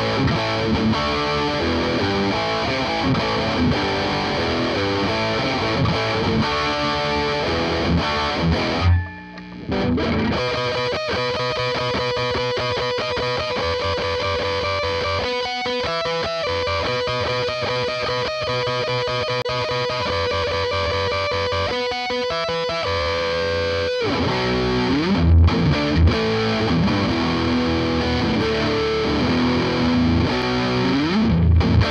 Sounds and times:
Bass guitar: 0.0s - 31.9s.

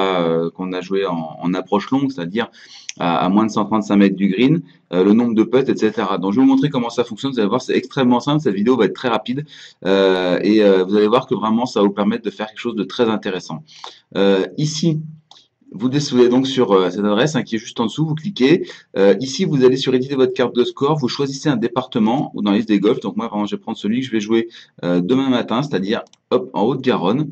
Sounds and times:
Speech: 0.0s - 27.3s.

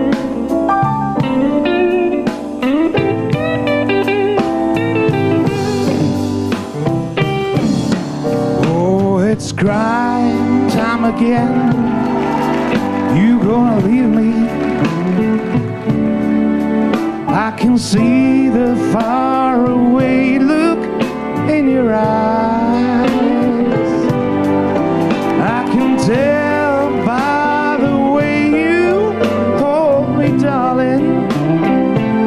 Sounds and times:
Music: 0.0s - 32.2s.

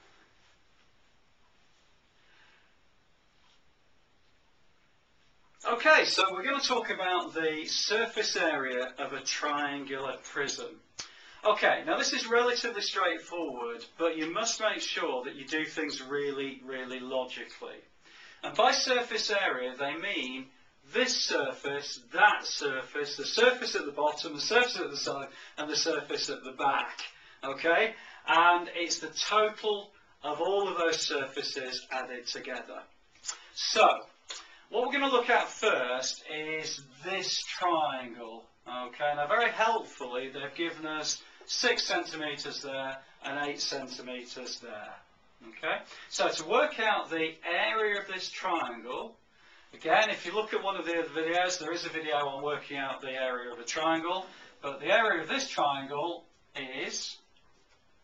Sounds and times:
Speech: 5.6s - 49.2s, 49.8s - 57.3s.

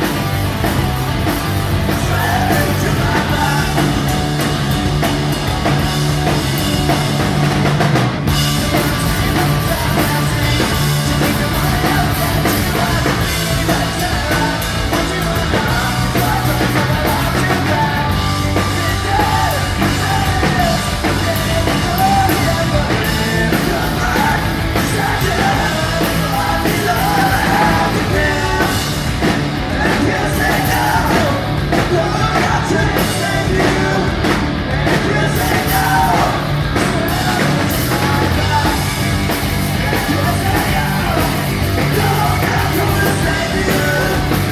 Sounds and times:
Punk rock: 0.0s - 44.5s
Singing: 1.8s - 4.5s, 8.3s - 44.5s.

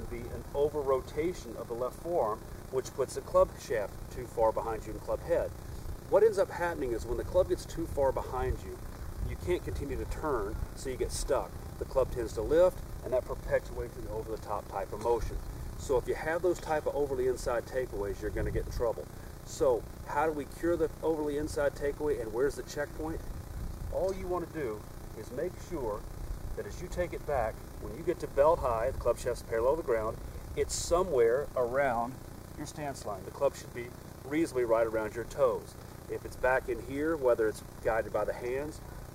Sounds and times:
Speech: 0.0s - 5.5s, 6.1s - 23.2s, 23.9s - 26.0s, 26.6s - 38.8s.

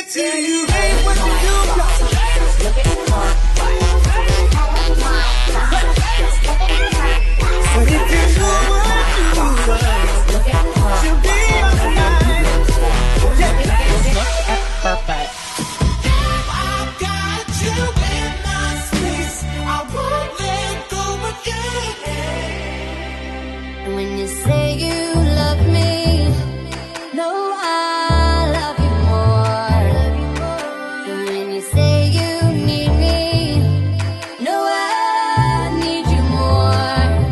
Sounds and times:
Music: 0.0s - 37.3s.

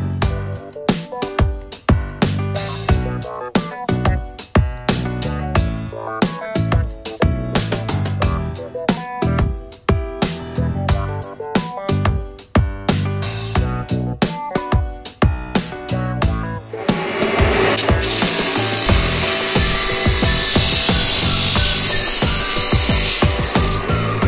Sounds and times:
Music: 0.0s - 24.2s.

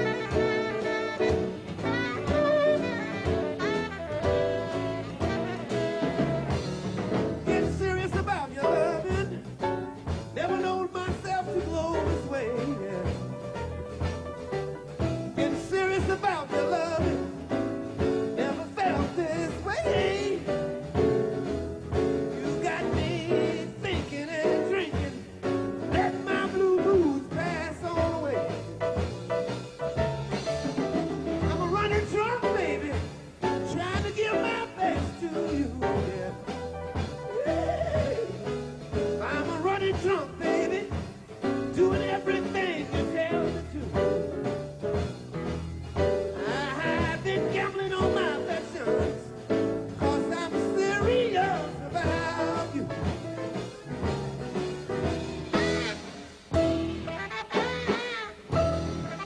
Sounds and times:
Gospel music: 0.0s - 59.2s
Jazz: 0.0s - 59.2s
Song: 0.0s - 59.2s.

